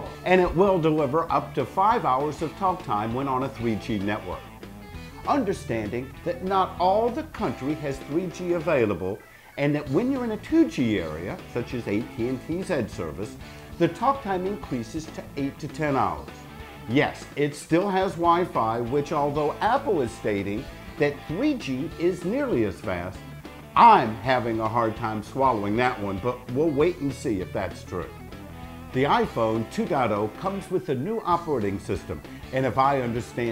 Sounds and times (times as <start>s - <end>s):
Speech: 0.0s - 4.4s, 5.3s - 23.2s, 23.8s - 28.2s, 29.0s - 33.5s
Music: 0.0s - 33.5s.